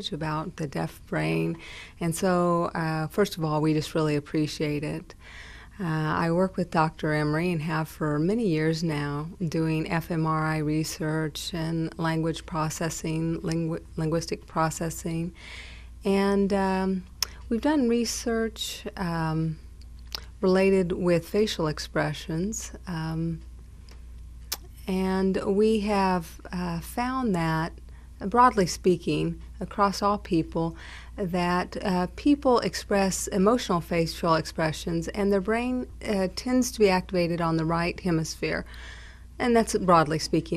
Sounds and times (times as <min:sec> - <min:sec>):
Speech: 0:00.0 - 0:05.2, 0:05.8 - 0:15.4, 0:16.1 - 0:19.6, 0:20.2 - 0:23.4, 0:24.6 - 0:38.7, 0:39.4 - 0:40.5.